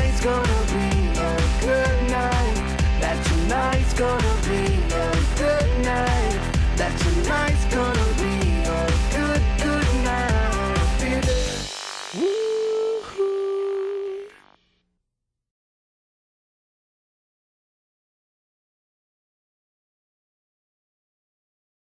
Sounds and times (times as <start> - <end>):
Soundtrack music: 0.0 - 14.1.